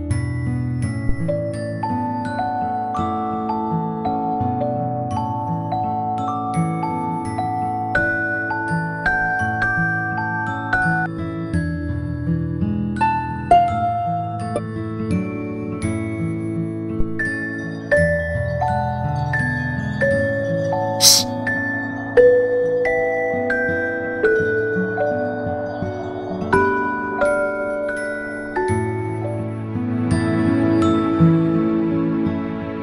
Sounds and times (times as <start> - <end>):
Music: 0.0 - 32.8.